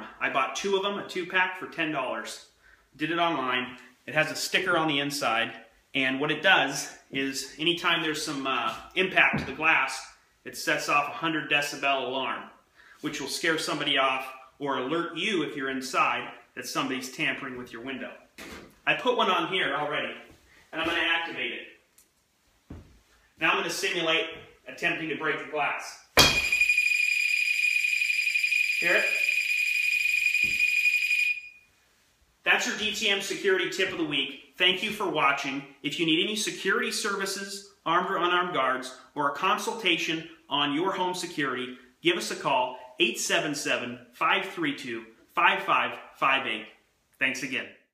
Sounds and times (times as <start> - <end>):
Speech: 0.0 - 21.8, 23.4 - 26.1, 28.8 - 29.3, 32.4 - 47.9.